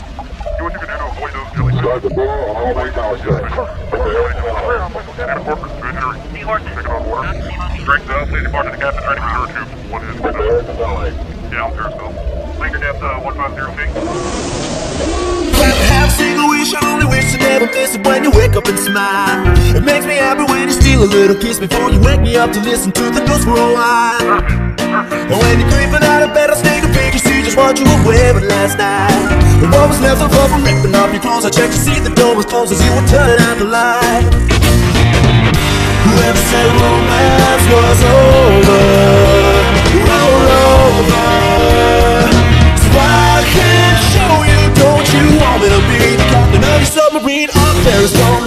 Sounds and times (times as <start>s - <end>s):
Speech: 0.6s - 13.9s
Music: 15.5s - 48.4s.